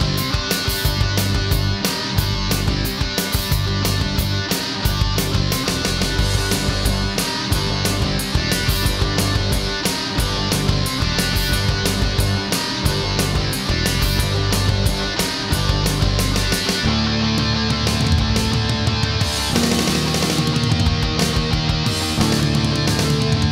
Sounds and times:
Music: 0.0 - 23.5.

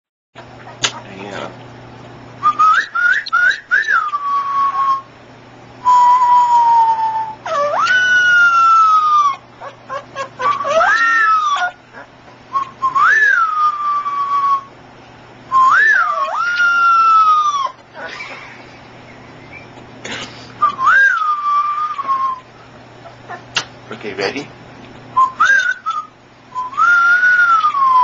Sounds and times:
Speech: 0.9 - 1.6, 23.9 - 24.5.

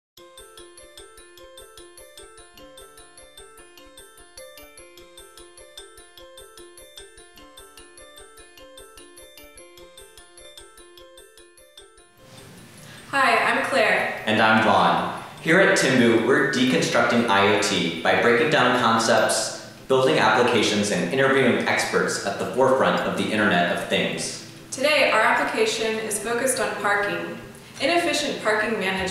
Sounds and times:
Music: 0.2 - 29.1.

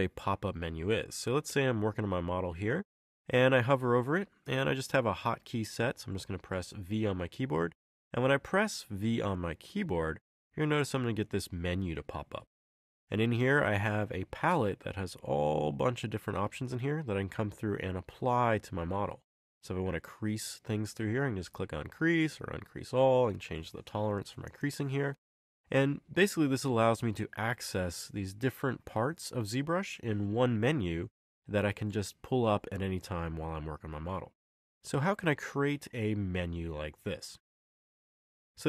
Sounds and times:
Speech: 0.0 - 12.5, 13.1 - 37.4.

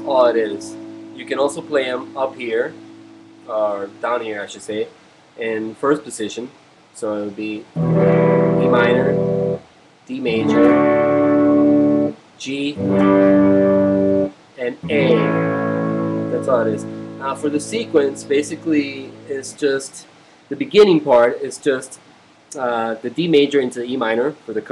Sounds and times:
Speech: 0.0 - 2.8, 3.5 - 7.7, 8.6 - 9.2, 10.1 - 10.7, 12.4 - 12.9, 14.6 - 15.3, 16.3 - 24.7
Music: 0.0 - 3.9, 7.8 - 9.6, 10.2 - 12.2, 12.8 - 19.6.

